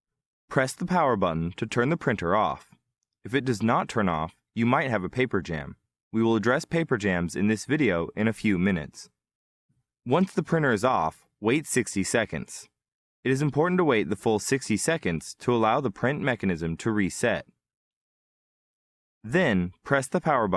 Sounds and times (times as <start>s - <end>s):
Speech: 0.5s - 9.2s, 10.0s - 17.6s, 19.3s - 20.5s.